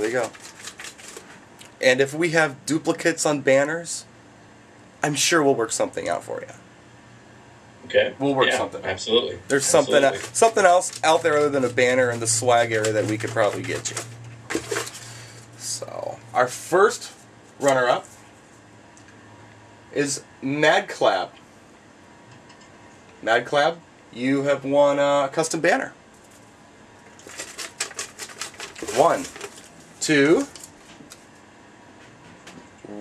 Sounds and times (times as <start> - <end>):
Speech: 0.0 - 0.3, 1.8 - 4.1, 5.0 - 6.6, 7.8 - 14.0, 15.6 - 18.1, 19.9 - 21.4, 23.2 - 26.0, 28.9 - 29.3, 30.0 - 30.5.